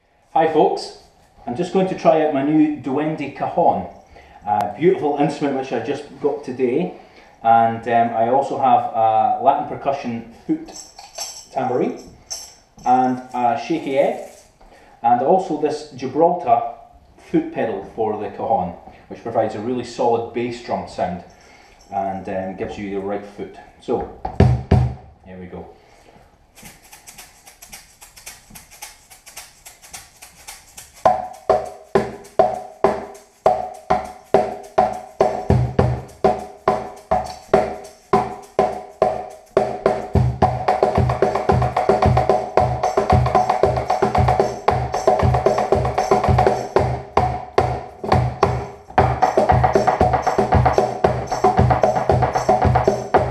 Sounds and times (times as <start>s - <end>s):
Percussion: 10.6s - 14.8s, 20.9s - 23.0s, 24.0s - 25.1s, 26.5s - 53.3s.